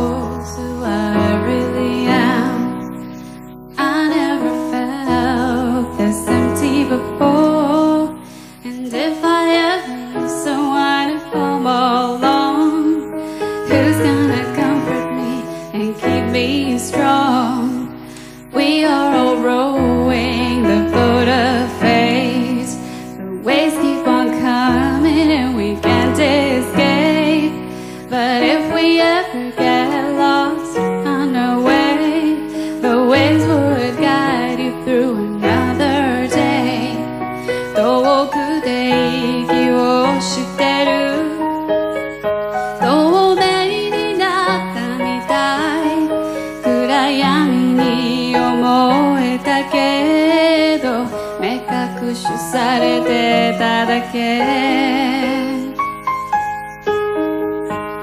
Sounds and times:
Music: 0.0 - 58.0.

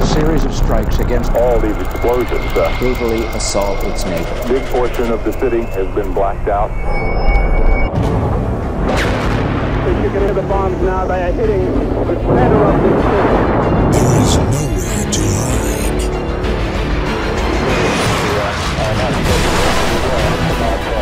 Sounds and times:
Speech: 0.0 - 6.7, 9.9 - 13.4, 14.0 - 16.2, 18.2 - 21.0.

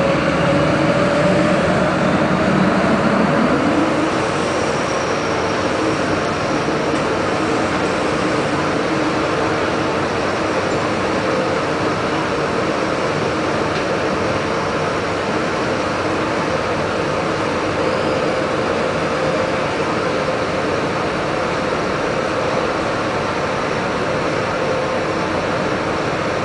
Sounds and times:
Engine: 0.0 - 26.4
Vehicle: 0.0 - 26.4.

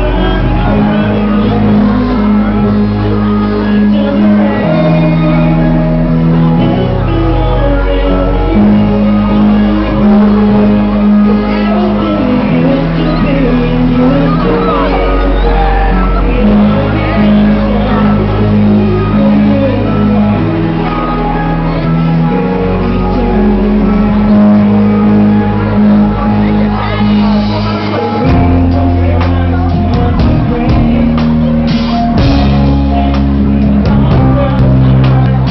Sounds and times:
Inside, public space: 0.0 - 35.5
Music: 0.0 - 35.5
Singing: 0.0 - 35.5.

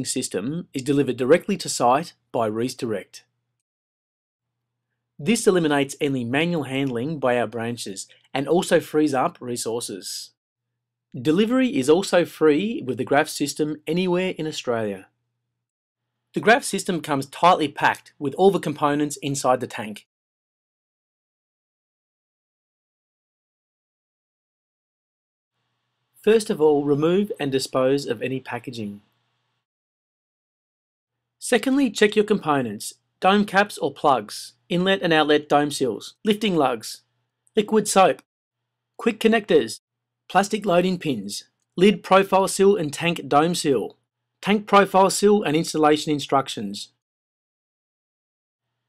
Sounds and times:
Speech: 0.0 - 3.3, 5.2 - 10.4, 11.2 - 15.2, 16.4 - 20.1, 26.2 - 29.0, 31.4 - 38.3, 39.0 - 47.0.

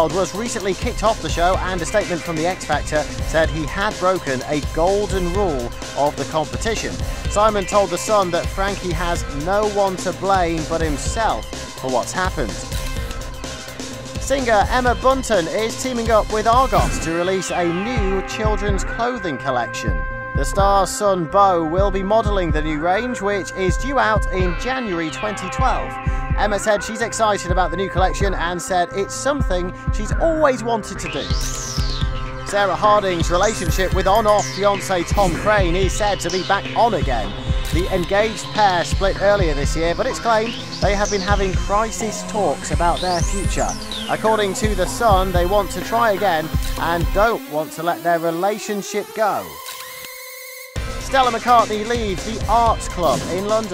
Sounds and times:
Speech: 0.0 - 12.7, 14.2 - 31.6, 32.5 - 49.6, 51.0 - 53.7
Music: 0.0 - 53.7.

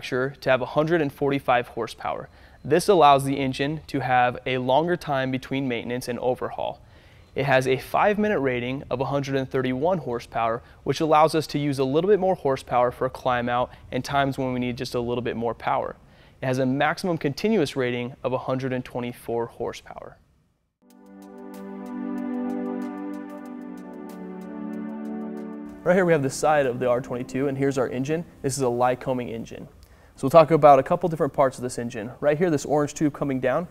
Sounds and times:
Speech: 0.0 - 6.8, 7.4 - 20.2, 25.8 - 33.7.

